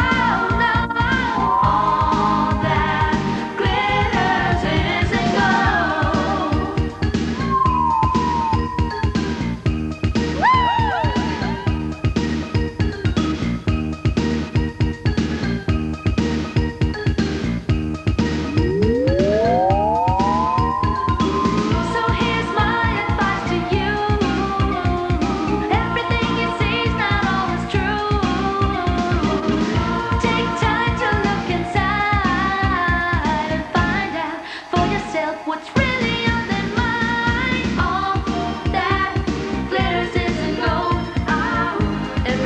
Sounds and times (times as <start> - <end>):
Singing: 0.0 - 6.8, 21.6 - 42.4.